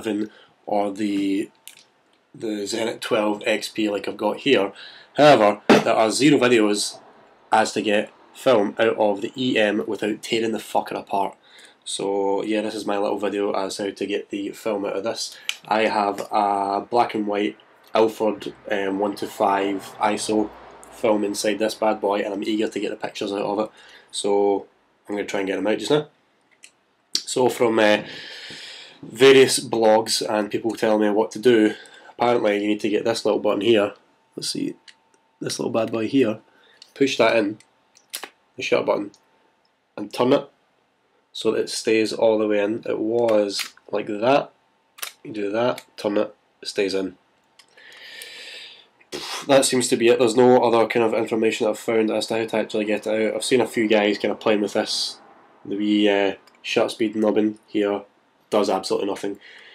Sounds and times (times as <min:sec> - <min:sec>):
Speech: 0:00.0 - 0:01.6, 0:02.4 - 0:26.2, 0:27.2 - 0:28.1, 0:29.0 - 0:36.4, 0:37.0 - 0:37.6, 0:38.2 - 0:39.2, 0:40.0 - 0:40.6, 0:41.4 - 0:47.2, 0:49.2 - 0:59.4.